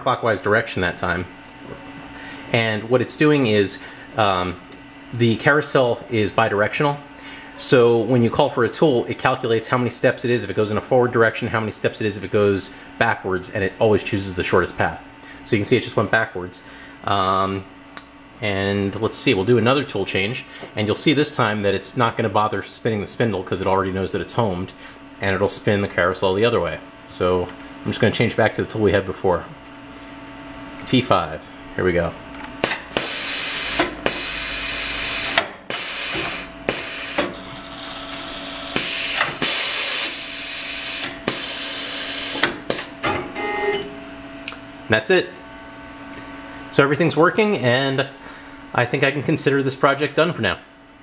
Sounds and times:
Speech: 0:00.0 - 0:01.3, 0:02.5 - 0:17.7, 0:18.4 - 0:29.6, 0:30.8 - 0:32.2, 0:44.9 - 0:45.4, 0:46.7 - 0:50.7.

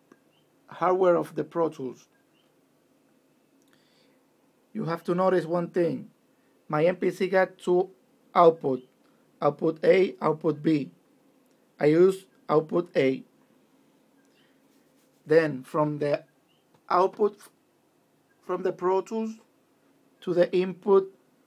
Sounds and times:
Speech: 0:00.7 - 0:02.1, 0:04.8 - 0:06.1, 0:06.7 - 0:11.0, 0:11.8 - 0:13.3, 0:15.3 - 0:16.3, 0:16.9 - 0:17.6, 0:18.4 - 0:19.5, 0:20.2 - 0:21.2.

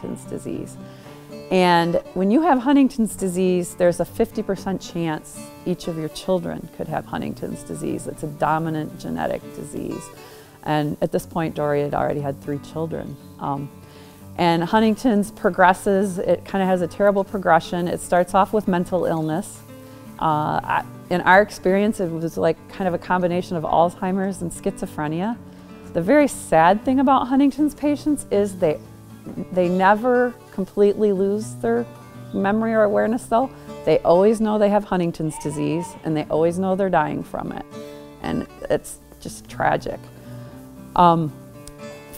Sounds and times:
Speech: 0:00.0 - 0:00.8, 0:01.5 - 0:13.7, 0:14.4 - 0:19.6, 0:20.2 - 0:40.1, 0:41.0 - 0:41.4
Music: 0:00.0 - 0:42.1.

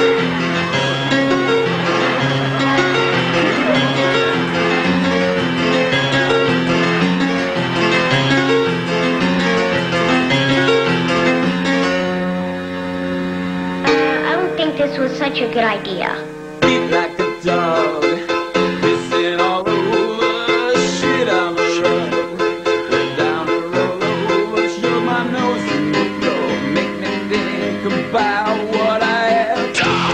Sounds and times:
Music: 0:00.0 - 0:30.1.

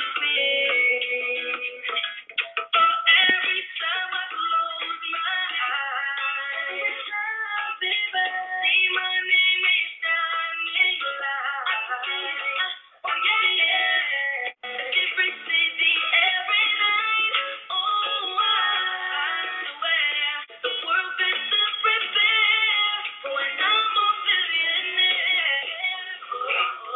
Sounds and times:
Female singing: 0:00.0 - 0:26.9
Music: 0:00.0 - 0:26.9.

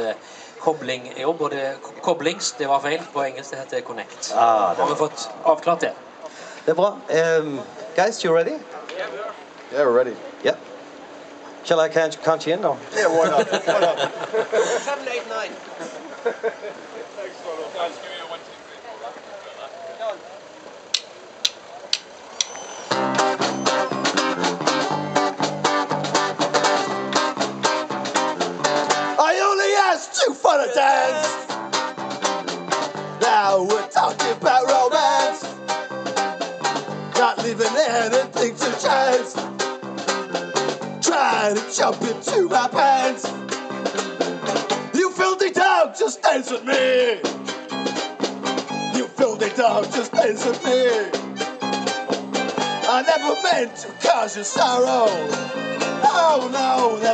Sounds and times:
Music: 0:22.9 - 0:29.8, 0:30.7 - 0:45.6, 0:46.3 - 0:57.1.

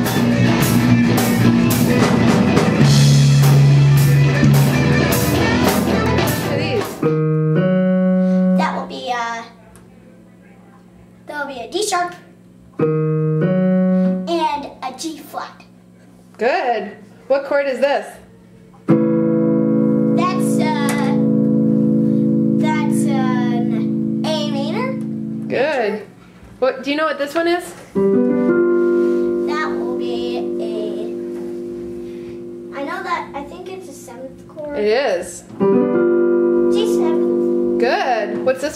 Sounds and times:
Guitar: 0:00.0 - 0:09.9, 0:11.3 - 0:15.8, 0:18.5 - 0:38.7
Child speech, kid speaking: 0:08.6 - 0:09.7, 0:10.6 - 0:12.4, 0:14.2 - 0:15.7, 0:20.2 - 0:21.2, 0:22.6 - 0:25.1, 0:29.4 - 0:31.2, 0:32.7 - 0:35.5, 0:36.7 - 0:37.4.

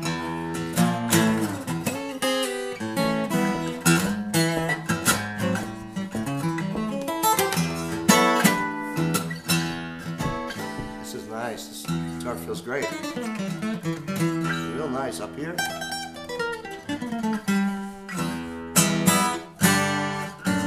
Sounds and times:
Acoustic guitar: 0:00.0 - 0:20.6
Speech: 0:11.1 - 0:13.1, 0:14.5 - 0:15.7.

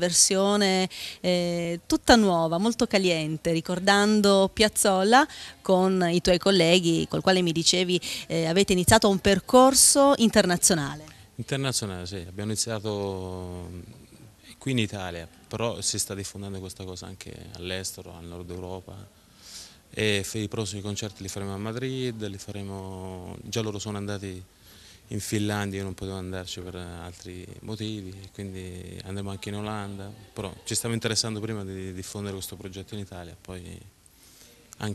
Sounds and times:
Speech: 0:00.0 - 0:19.1, 0:20.0 - 0:24.4, 0:25.1 - 0:33.9.

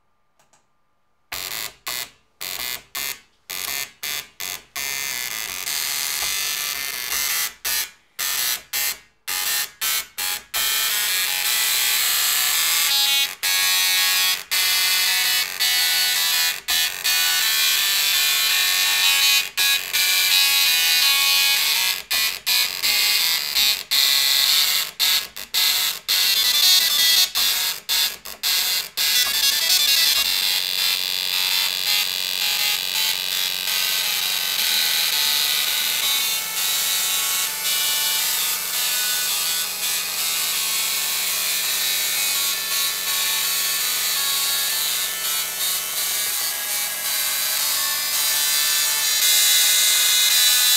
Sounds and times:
Printer: 0:01.4 - 0:50.7.

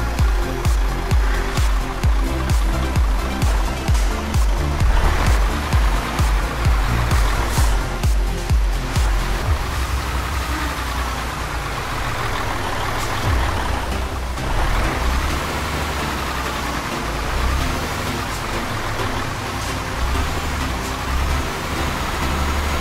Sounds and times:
Music: 0:00.0 - 0:11.0, 0:12.4 - 0:22.8
Vehicle: 0:00.0 - 0:22.8.

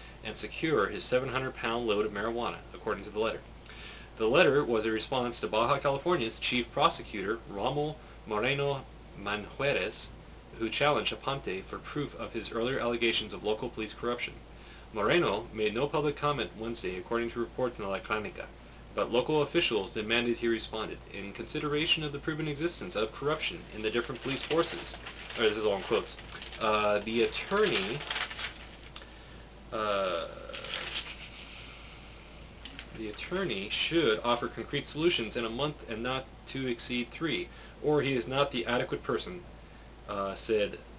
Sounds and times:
Inside, small room: 0:00.0 - 0:40.9
Speech: 0:00.2 - 0:03.5, 0:04.2 - 0:28.2, 0:29.7 - 0:31.0, 0:32.9 - 0:39.5, 0:40.1 - 0:40.9.

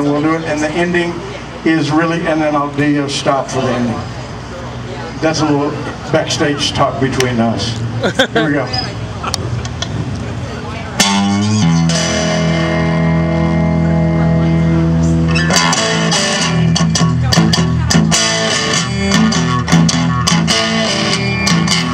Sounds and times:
Speech: 0:00.0 - 0:09.2
Music: 0:11.0 - 0:21.9.

